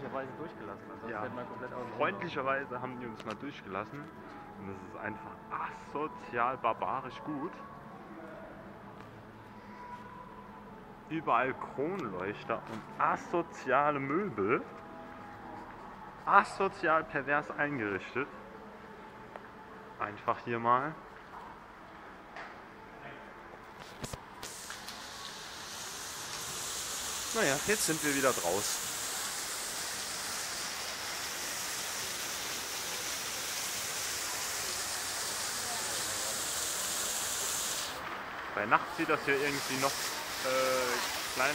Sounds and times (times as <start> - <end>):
Speech: 27.4 - 28.8, 38.6 - 41.5.